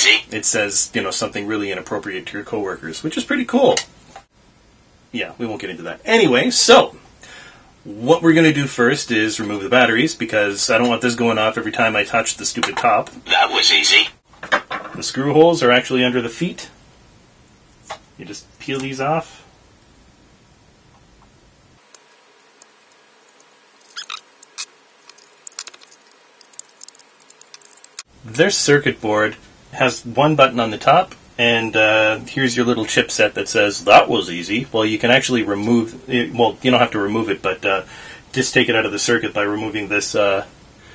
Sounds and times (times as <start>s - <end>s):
Speech: 0.0s - 3.9s, 5.1s - 7.0s, 7.8s - 14.2s, 15.0s - 16.8s, 18.2s - 19.5s, 28.2s - 40.5s.